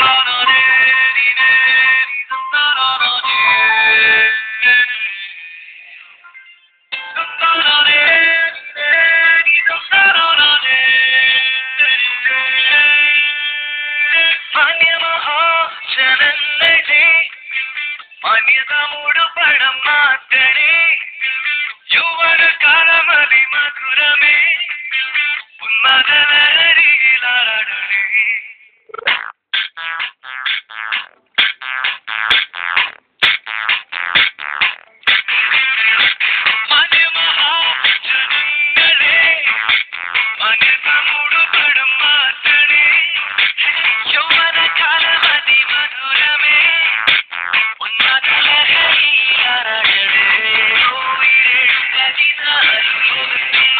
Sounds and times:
Music: 0:00.0 - 0:28.3, 0:29.1 - 0:53.7.

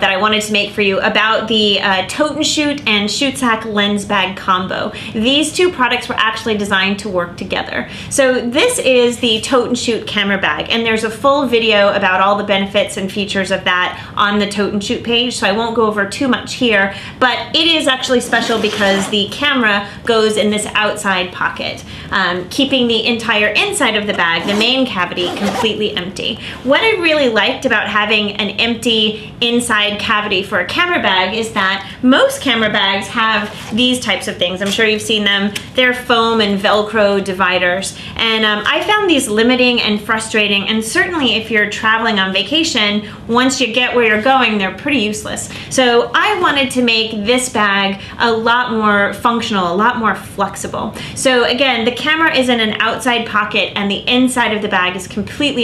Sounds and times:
Speech: 0:00.0 - 0:55.6.

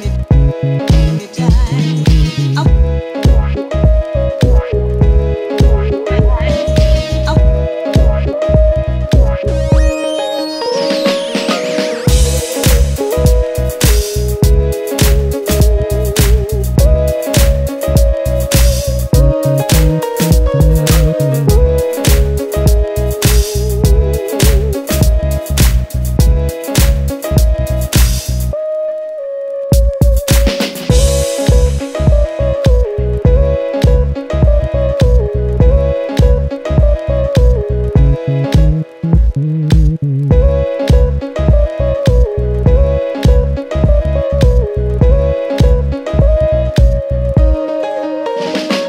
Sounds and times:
Music: 0:00.0 - 0:48.8.

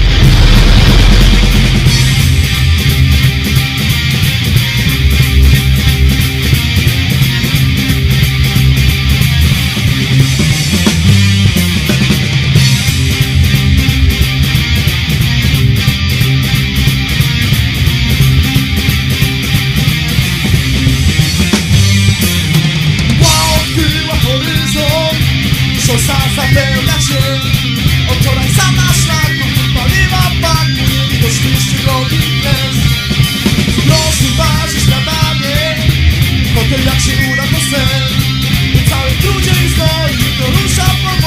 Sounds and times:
Music: 0:00.0 - 0:41.2.

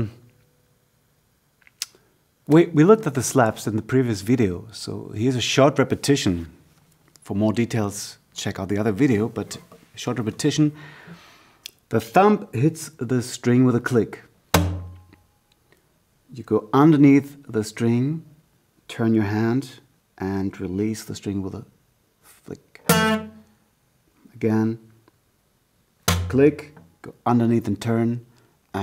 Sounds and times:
Speech: 0:00.0 - 0:00.2, 0:02.5 - 0:06.6, 0:07.2 - 0:10.8, 0:11.9 - 0:14.3, 0:16.3 - 0:22.9, 0:24.2 - 0:24.9, 0:26.3 - 0:28.8.

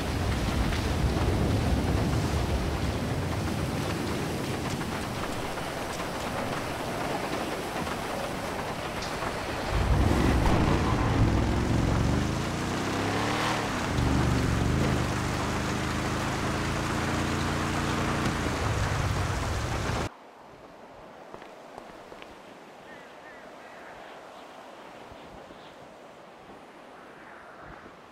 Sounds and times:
Car: 0:08.8 - 0:20.1.

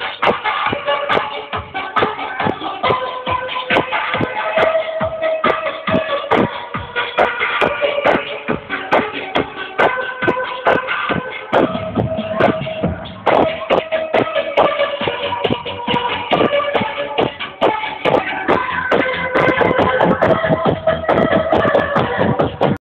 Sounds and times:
Music: 0:00.0 - 0:22.8.

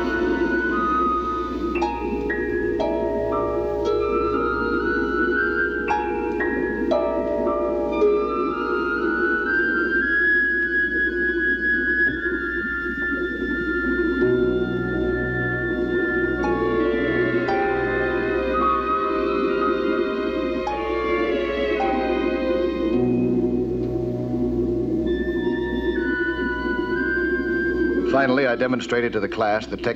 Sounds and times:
Music: 0:00.0 - 0:29.9
Speech: 0:28.1 - 0:29.9.

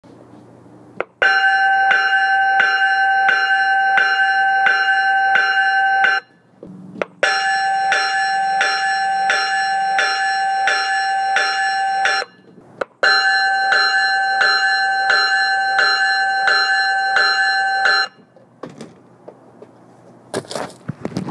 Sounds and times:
Bell: 0:01.2 - 0:06.3, 0:07.2 - 0:18.2.

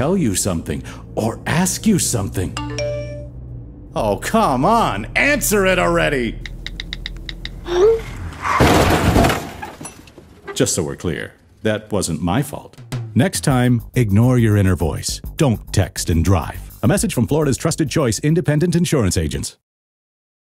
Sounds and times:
Speech: 0:00.0 - 0:02.6, 0:04.0 - 0:06.4, 0:10.5 - 0:19.6
Music: 0:02.4 - 0:03.8, 0:12.7 - 0:18.8.

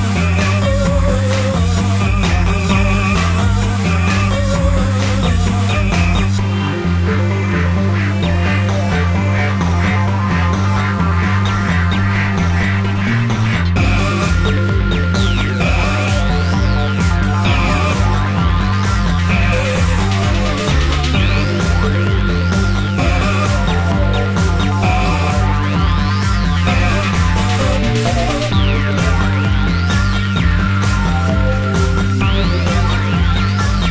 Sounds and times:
Video game music: 0:00.1 - 0:33.9.

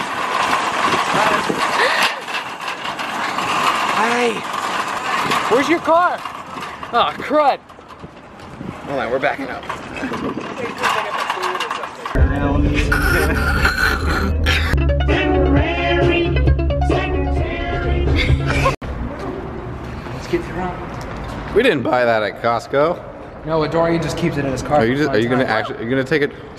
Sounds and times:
Outside, urban or manmade: 0:00.0 - 0:26.5.

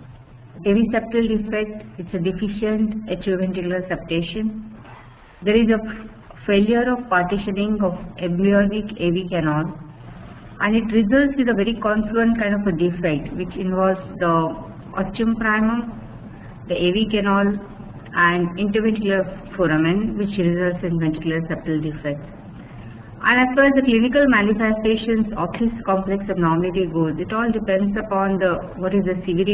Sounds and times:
Speech: 0:00.6 - 0:04.6, 0:05.4 - 0:09.8, 0:10.6 - 0:16.0, 0:16.7 - 0:22.3, 0:23.2 - 0:29.5.

